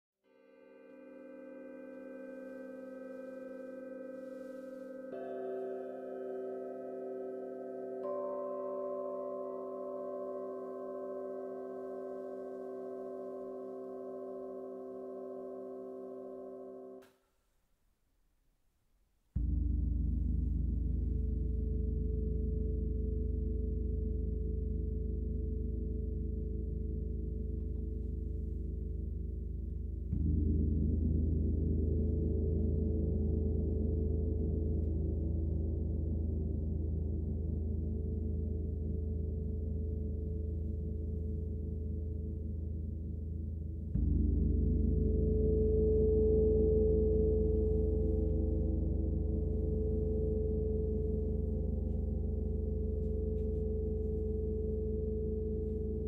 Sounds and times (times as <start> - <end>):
Gong: 0.3 - 17.0, 19.4 - 56.0.